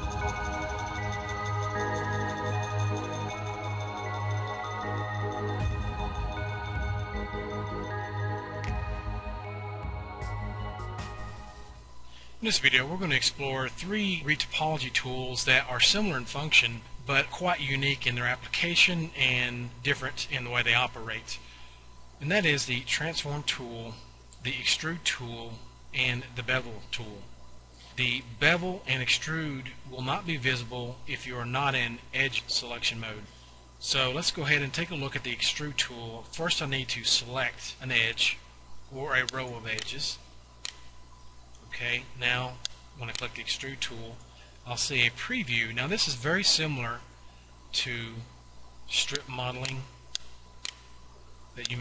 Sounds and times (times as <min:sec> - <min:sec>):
Speech: 0:12.4 - 0:21.4, 0:22.2 - 0:27.3, 0:28.0 - 0:40.3, 0:41.6 - 0:47.1, 0:47.7 - 0:49.9, 0:51.6 - 0:51.8.